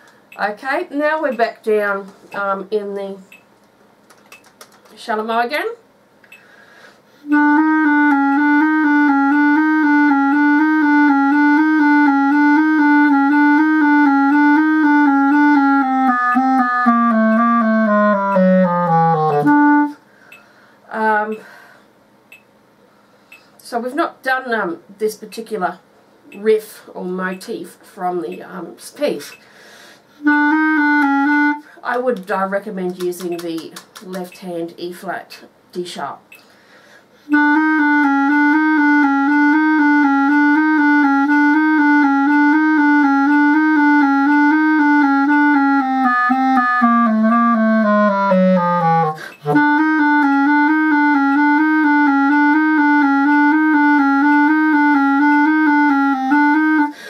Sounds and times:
Clarinet: 0:07.2 - 0:20.0, 0:30.2 - 0:31.8, 0:37.2 - 0:57.1.

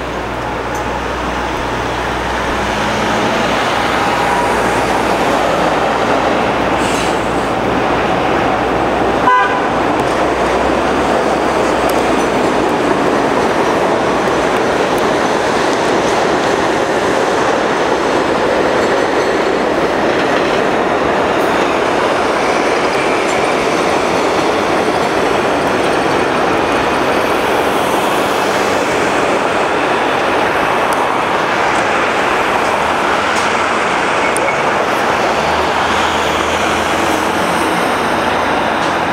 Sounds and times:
Bus: 0:00.0 - 0:39.1
Outside, urban or manmade: 0:00.0 - 0:39.1.

